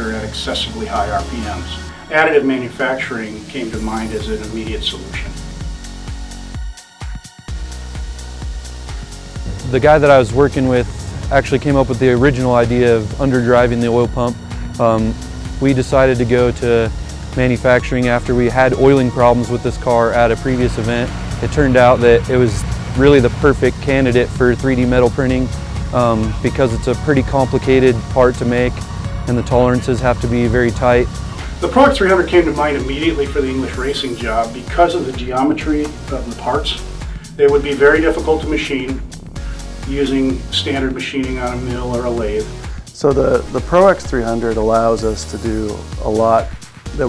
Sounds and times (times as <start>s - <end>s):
Speech: 0.0s - 5.3s, 9.6s - 39.0s, 39.9s - 47.0s
Music: 0.0s - 47.0s.